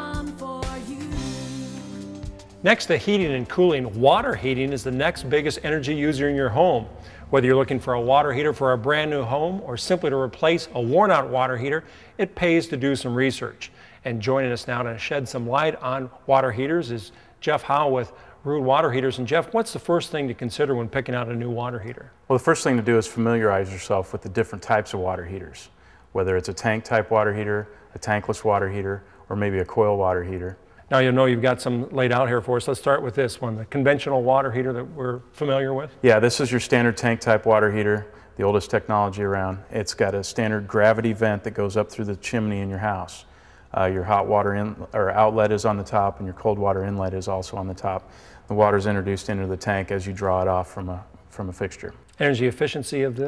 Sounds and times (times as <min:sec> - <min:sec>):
Music: 0:00.0 - 0:05.9
Speech: 0:02.6 - 0:53.2.